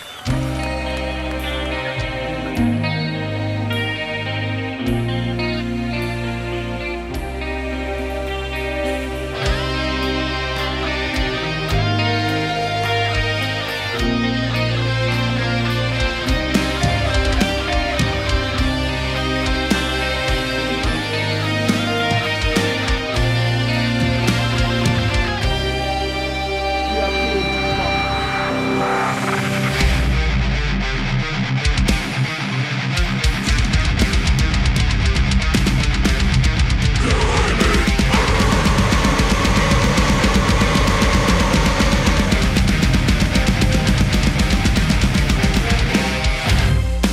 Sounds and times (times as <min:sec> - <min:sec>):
Exciting music: 0:00.0 - 0:47.1
Speech: 0:26.9 - 0:28.0, 0:37.0 - 0:38.9.